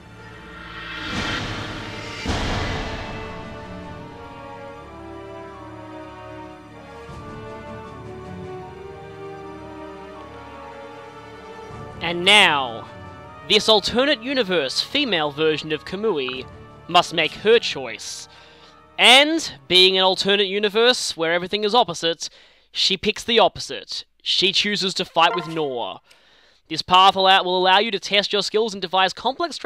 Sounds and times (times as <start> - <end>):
Music: 0.0 - 20.2, 25.2 - 25.8
Speech: 12.0 - 12.9, 13.5 - 18.3, 19.0 - 26.0, 26.7 - 29.6.